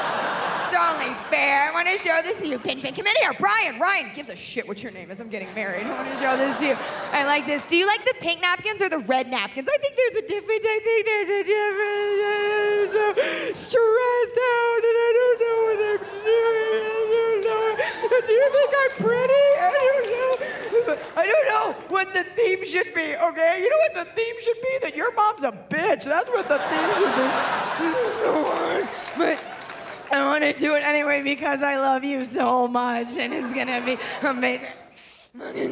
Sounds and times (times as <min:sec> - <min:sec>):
Female speech, woman speaking: 0:00.7 - 0:20.3, 0:21.2 - 0:27.4, 0:30.1 - 0:34.8.